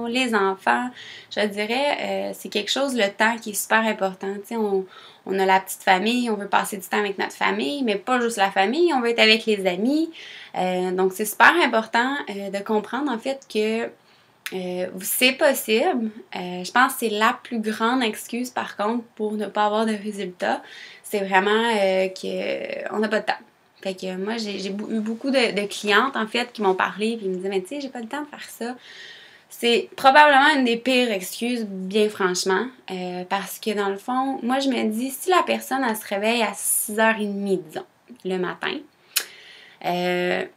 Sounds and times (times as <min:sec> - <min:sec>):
Speech: 0:00.0 - 0:28.8, 0:29.5 - 0:38.9, 0:39.8 - 0:40.5.